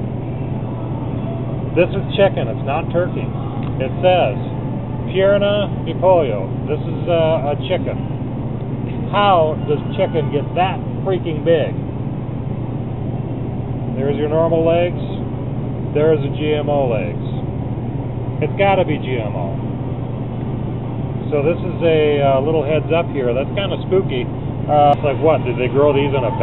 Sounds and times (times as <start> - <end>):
Speech: 1.8 - 4.5, 5.1 - 8.0, 9.1 - 11.8, 14.0 - 15.2, 16.0 - 17.4, 18.4 - 19.6, 21.3 - 26.4.